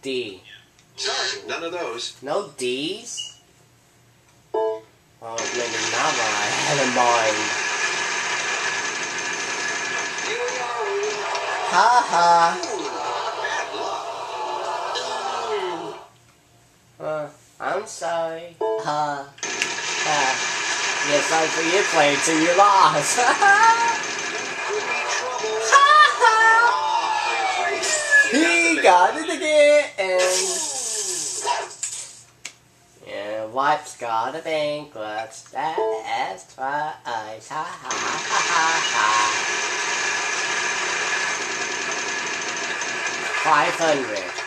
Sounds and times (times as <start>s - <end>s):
Speech: 0.0s - 3.4s, 5.2s - 7.5s, 17.0s - 19.4s, 21.1s - 24.0s, 33.0s - 39.4s, 43.4s - 44.3s.